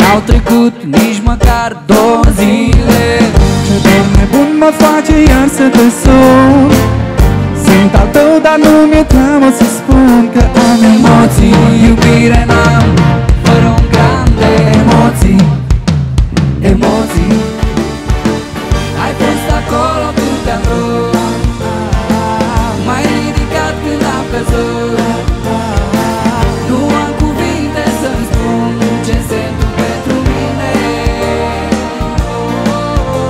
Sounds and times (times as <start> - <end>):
Music: 0.0 - 33.3.